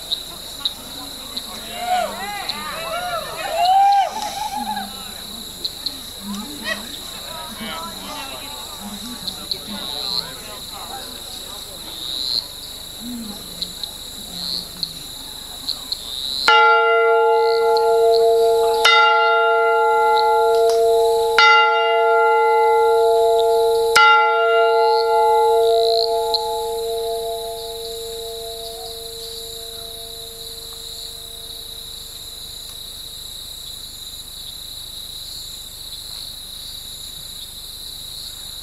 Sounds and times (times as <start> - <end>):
Outside, rural or natural: 0.0 - 38.6.